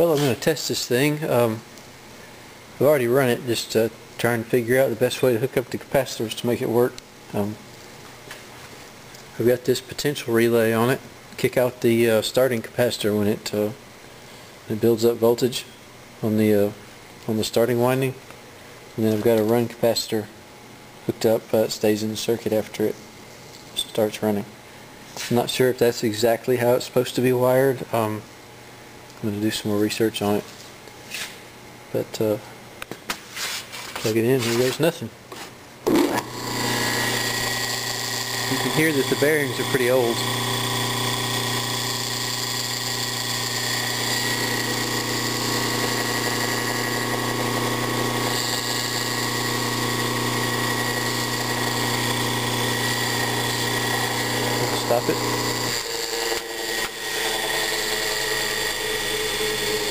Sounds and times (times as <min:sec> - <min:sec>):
Speech: 0:00.0 - 0:01.7, 0:02.8 - 0:07.6, 0:09.3 - 0:13.8, 0:14.7 - 0:18.2, 0:19.0 - 0:20.4, 0:21.1 - 0:23.0, 0:23.8 - 0:24.6, 0:25.2 - 0:28.3, 0:29.2 - 0:30.5, 0:31.9 - 0:32.5, 0:34.0 - 0:35.2, 0:38.5 - 0:40.3, 0:54.5 - 0:55.4.